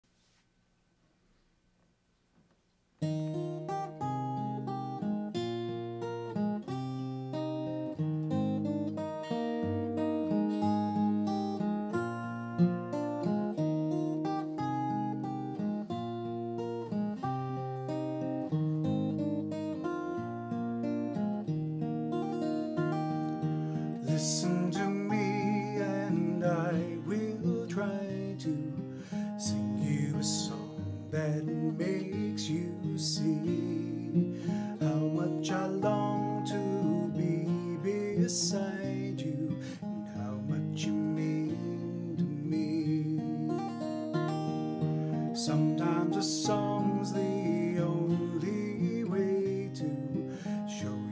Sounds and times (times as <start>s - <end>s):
Acoustic guitar: 0.0s - 51.1s.